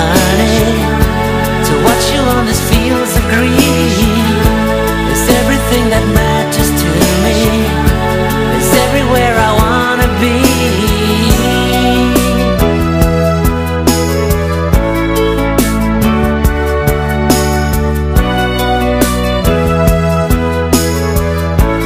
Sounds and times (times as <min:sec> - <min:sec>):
Musical instrument: 0:00.0 - 0:21.8
Pop music: 0:00.0 - 0:21.8.